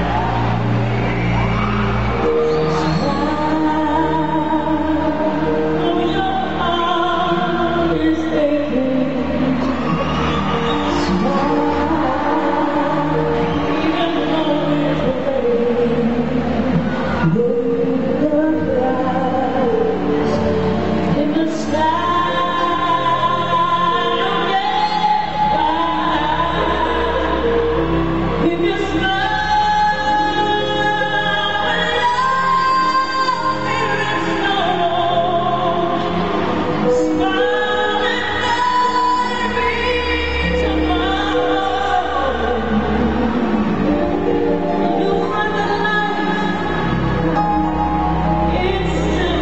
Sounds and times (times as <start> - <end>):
Cheering: 0.0 - 49.4
Music: 0.0 - 49.4.